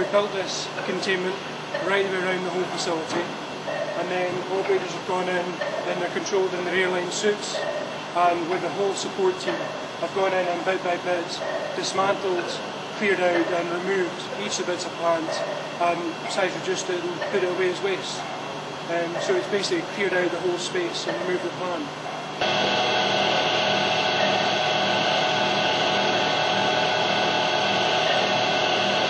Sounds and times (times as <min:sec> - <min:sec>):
Speech: 0:00.0 - 0:03.3, 0:04.0 - 0:18.3, 0:18.9 - 0:21.9.